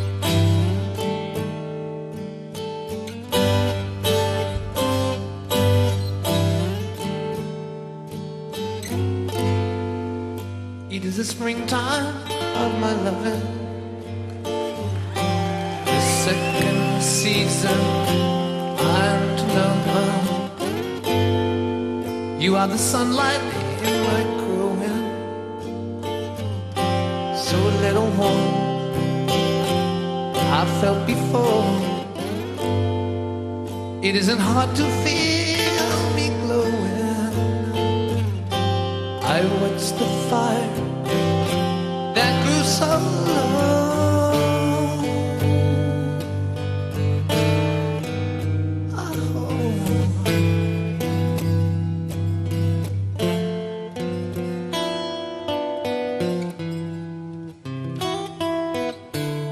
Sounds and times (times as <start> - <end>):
Music: 0.0 - 59.5.